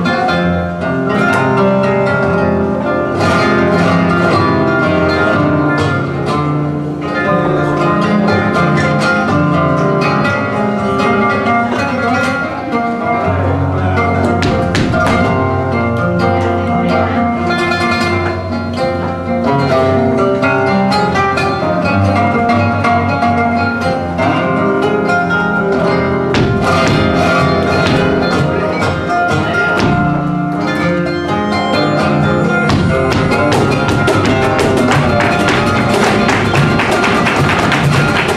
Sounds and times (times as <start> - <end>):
Music of Latin America: 0.0 - 38.3.